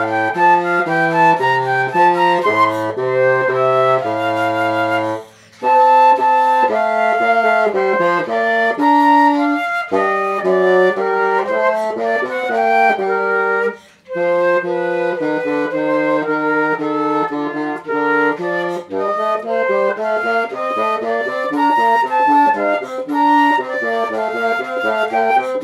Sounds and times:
Flute: 0.0s - 25.6s.

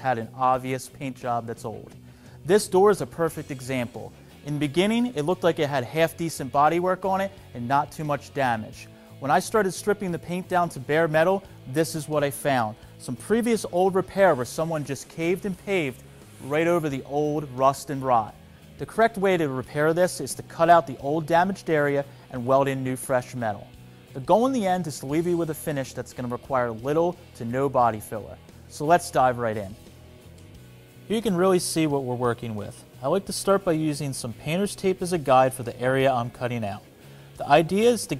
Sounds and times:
Speech: 0.0s - 29.8s, 31.1s - 38.1s
Music: 0.0s - 38.1s.

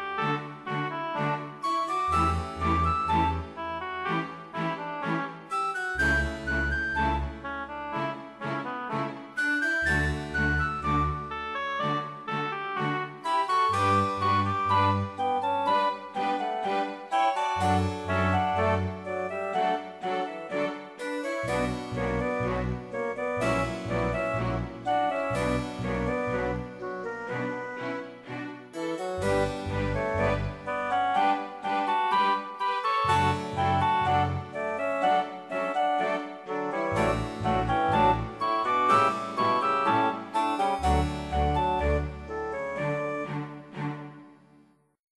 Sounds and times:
Music: 0.0s - 45.0s.

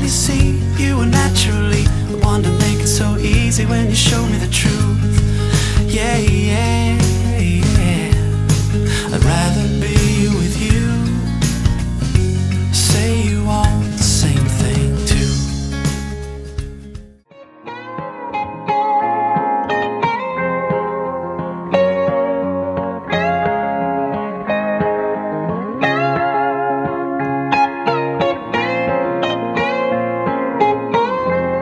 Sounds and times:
Steel guitar, slide guitar: 0.0s - 16.7s, 17.3s - 31.6s.

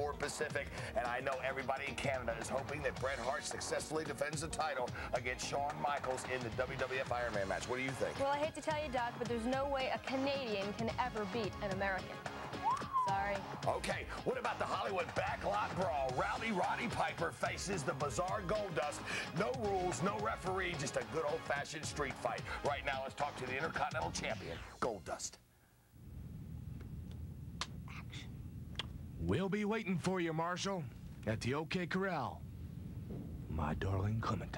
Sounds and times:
Speech: 0.0s - 12.1s, 13.1s - 25.4s, 33.5s - 34.5s
Music: 0.0s - 25.3s.

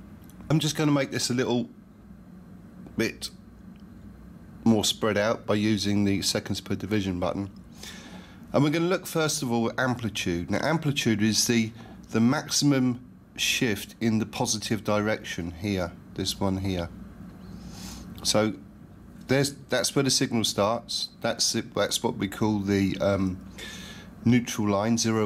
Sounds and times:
Speech: 0.5s - 1.8s, 2.9s - 3.4s, 4.6s - 7.6s, 8.5s - 17.0s, 18.2s - 18.6s, 19.2s - 23.4s, 24.2s - 25.2s.

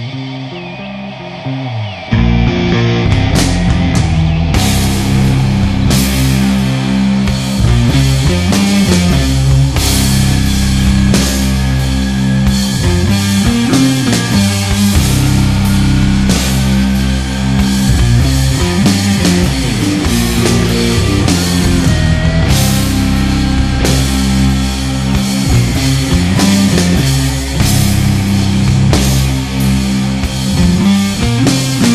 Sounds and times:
Music: 0.0s - 31.9s.

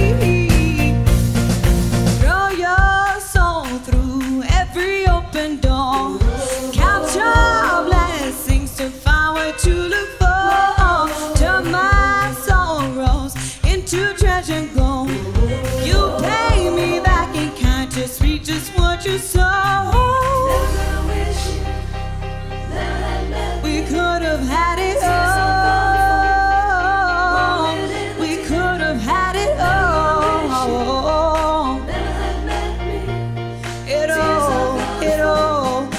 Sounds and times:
Music: 0.0s - 35.9s
Singing: 2.2s - 21.6s, 22.7s - 33.3s, 33.9s - 35.9s.

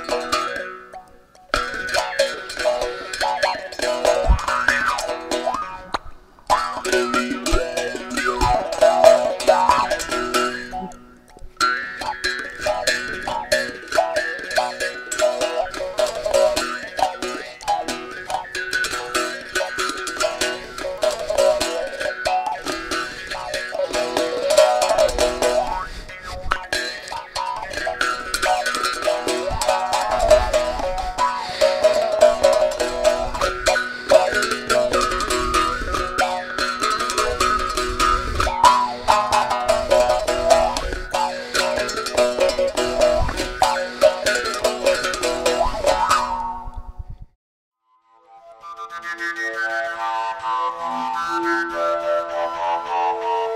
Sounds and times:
Bowed string instrument: 0.0s - 46.9s.

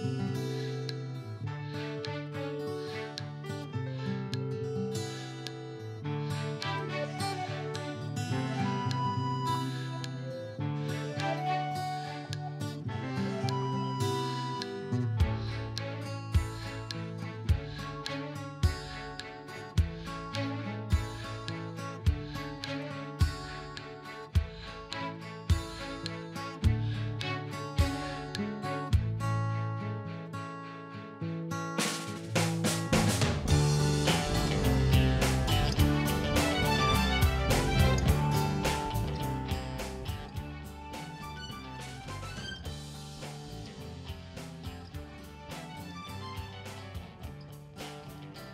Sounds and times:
Music: 0.0s - 48.5s.

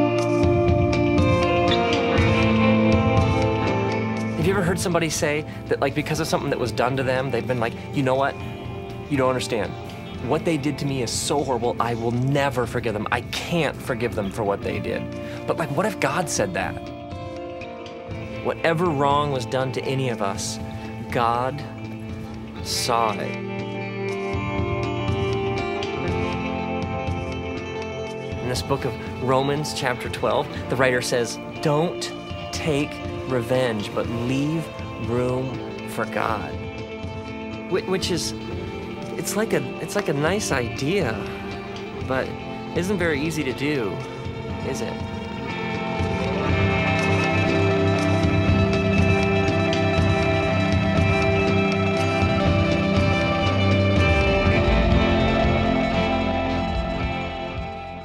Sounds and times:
Music: 0.0s - 58.0s
Speech: 4.4s - 8.4s, 9.1s - 16.9s, 18.4s - 21.7s, 22.6s - 23.4s, 28.4s - 36.6s, 37.7s - 38.4s, 39.2s - 41.4s, 42.1s - 44.0s, 44.6s - 45.0s.

